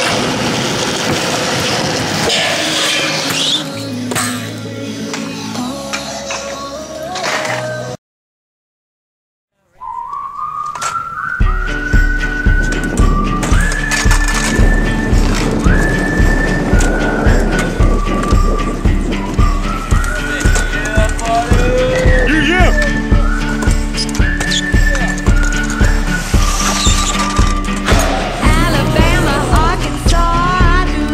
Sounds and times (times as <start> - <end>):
Outside, rural or natural: 0.0 - 8.0, 9.5 - 31.1
Skateboard: 0.0 - 8.0, 12.0 - 22.3, 22.9 - 28.4
Music: 2.2 - 8.0, 10.5 - 31.1.